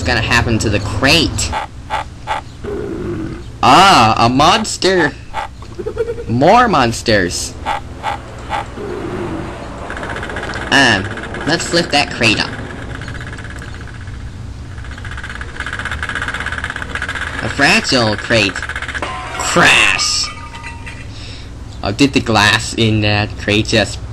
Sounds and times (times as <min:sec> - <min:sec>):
Outside, urban or manmade: 0:00.0 - 0:24.1
Speech: 0:10.8 - 0:12.5, 0:17.4 - 0:18.6, 0:21.8 - 0:24.0.